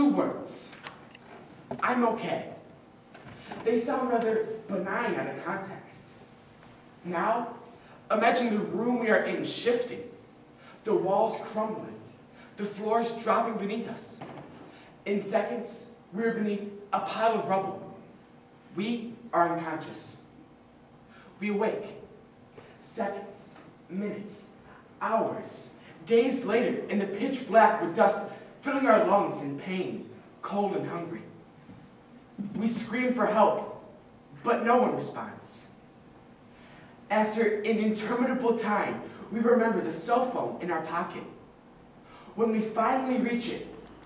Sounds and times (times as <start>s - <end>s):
Male speech, man speaking: 0.0s - 0.8s, 1.8s - 2.6s, 3.6s - 6.2s, 7.1s - 10.2s, 10.9s - 14.2s, 15.1s - 18.0s, 18.8s - 20.3s, 21.4s - 22.0s, 22.8s - 31.4s, 32.5s - 35.8s, 37.1s - 41.4s, 42.4s - 43.8s
Narration, monologue: 0.0s - 44.0s.